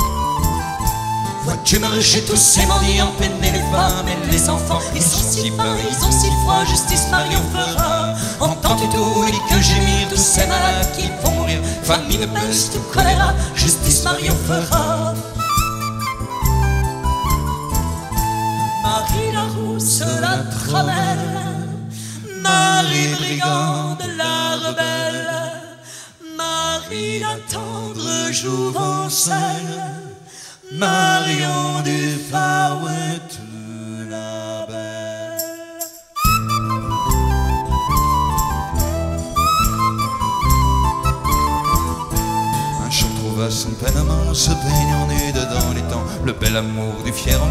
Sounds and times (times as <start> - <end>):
Music: 0.0 - 23.2, 35.4 - 47.5.